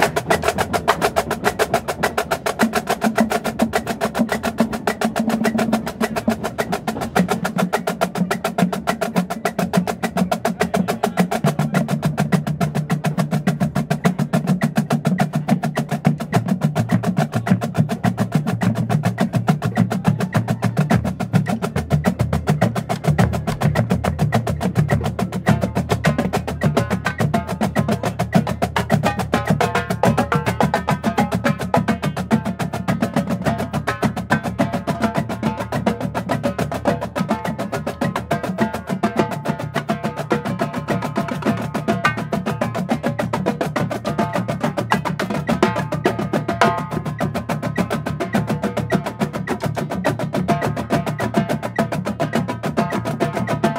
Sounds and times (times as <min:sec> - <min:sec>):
Percussion: 0:00.0 - 0:53.7.